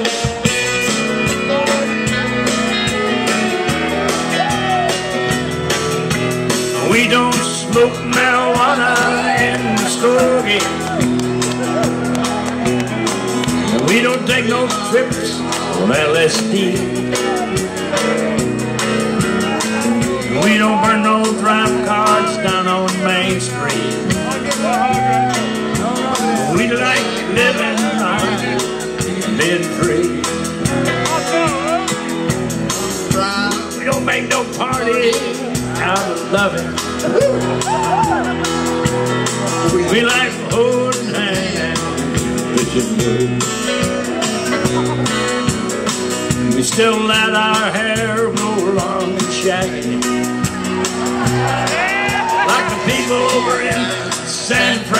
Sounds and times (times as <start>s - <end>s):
Psychedelic rock: 0.0s - 55.0s.